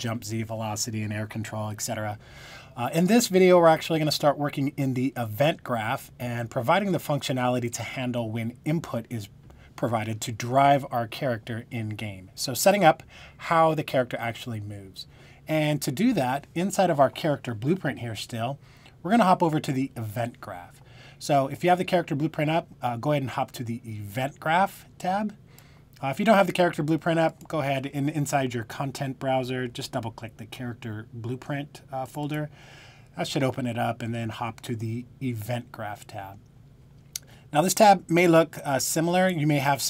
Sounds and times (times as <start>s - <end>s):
Speech: 0.0s - 2.2s, 2.8s - 25.4s, 26.0s - 32.5s, 33.2s - 36.4s, 37.5s - 39.9s.